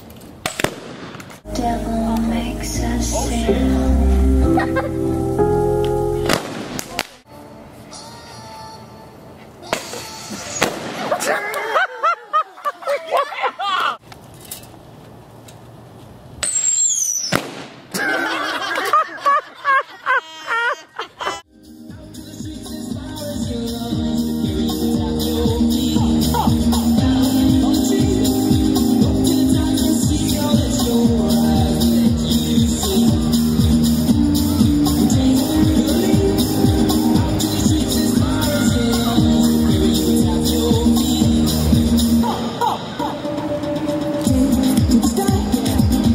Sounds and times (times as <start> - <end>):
Firecracker: 0.4 - 1.4, 6.3 - 7.2, 9.7 - 11.3, 16.4 - 17.9
Music: 1.5 - 6.6, 7.3 - 10.6, 21.5 - 46.1.